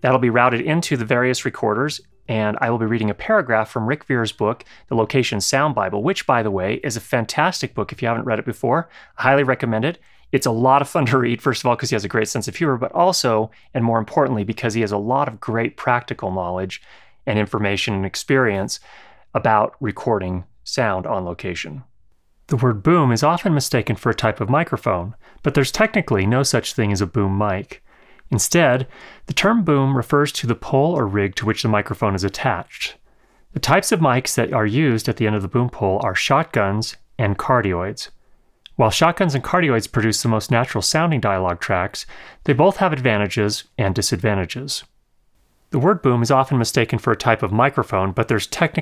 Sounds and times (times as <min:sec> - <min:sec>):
Speech: 0:00.0 - 0:21.9, 0:22.5 - 0:45.0, 0:45.7 - 0:48.8.